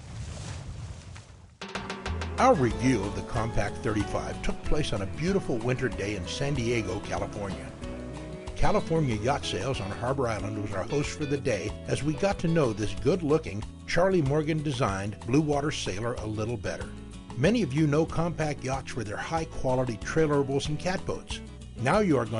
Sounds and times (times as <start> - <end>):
Music: 1.6 - 22.3
Speech: 2.4 - 7.7, 8.6 - 22.3.